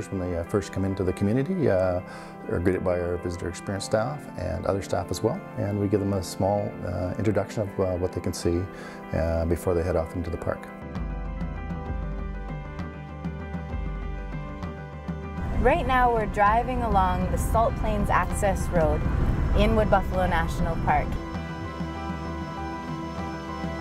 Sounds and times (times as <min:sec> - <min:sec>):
Speech: 0:00.0 - 0:10.7, 0:19.6 - 0:21.1
Music: 0:00.0 - 0:23.8.